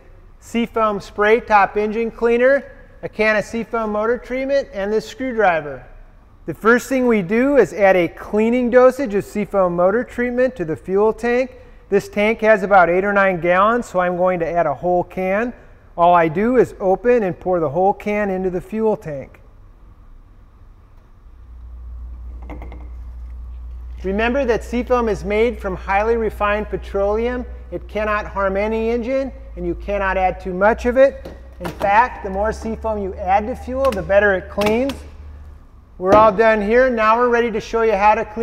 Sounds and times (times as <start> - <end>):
Speech: 0.4 - 5.9, 6.5 - 19.4, 24.0 - 35.1, 36.0 - 38.4.